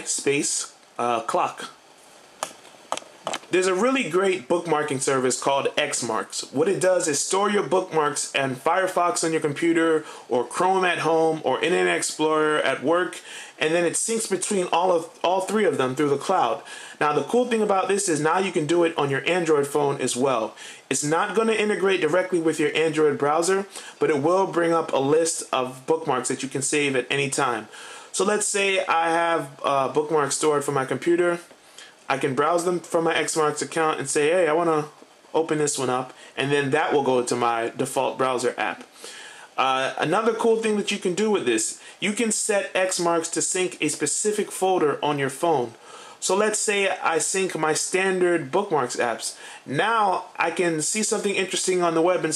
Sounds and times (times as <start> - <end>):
Speech: 0.0 - 1.8, 3.4 - 31.5, 32.1 - 38.9, 39.6 - 52.3.